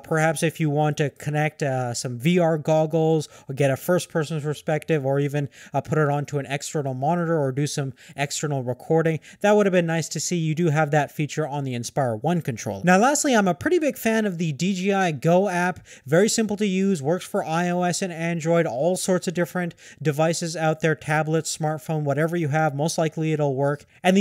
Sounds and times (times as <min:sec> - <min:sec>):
Speech: 0:00.0 - 0:24.2.